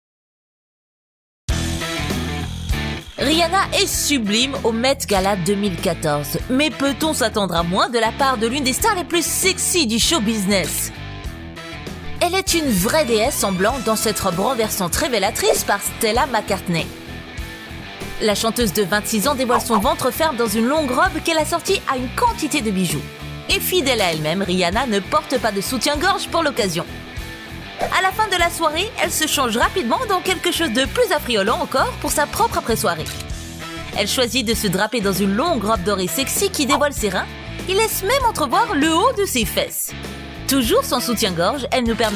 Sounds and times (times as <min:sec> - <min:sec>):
Music: 0:01.5 - 0:42.1
Speech: 0:03.2 - 0:11.0, 0:12.2 - 0:16.9, 0:18.2 - 0:26.9, 0:27.8 - 0:33.2, 0:33.9 - 0:42.1.